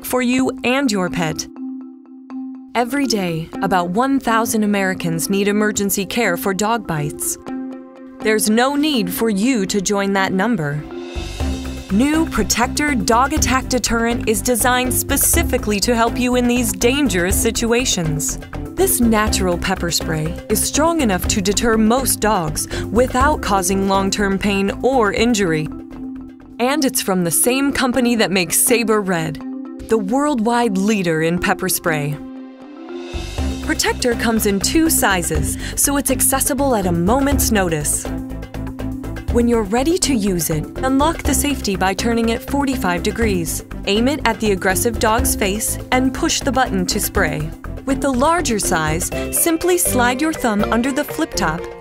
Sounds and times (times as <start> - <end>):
Speech: 0.0 - 1.5, 2.8 - 7.4, 8.3 - 10.8, 11.9 - 25.7, 26.6 - 32.2, 33.7 - 38.1, 39.3 - 51.7
Music: 0.0 - 51.8.